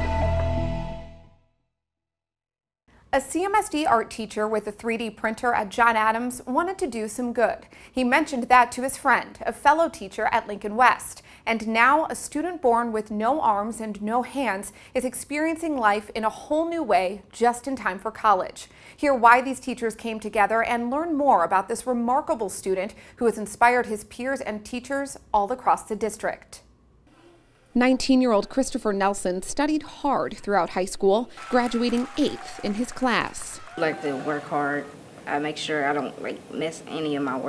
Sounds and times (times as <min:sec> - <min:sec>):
Speech: 0:03.2 - 0:26.6, 0:27.8 - 0:37.4.